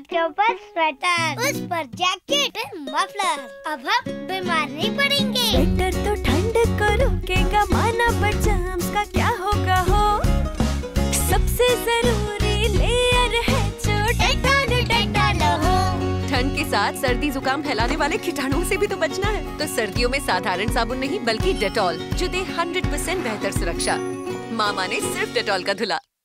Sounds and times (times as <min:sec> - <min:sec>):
Music for children: 0:02.6 - 0:16.6.